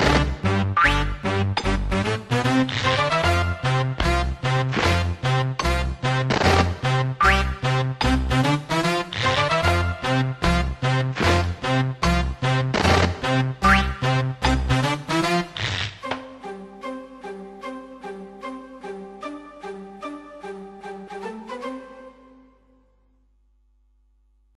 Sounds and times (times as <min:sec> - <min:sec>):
Music: 0:00.0 - 0:23.6.